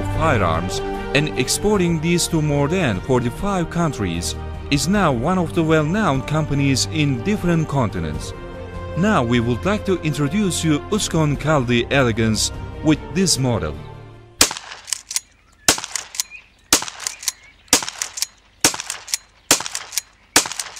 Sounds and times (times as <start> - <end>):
Speech: 0.0 - 8.3, 9.0 - 13.9
Music: 0.0 - 14.4.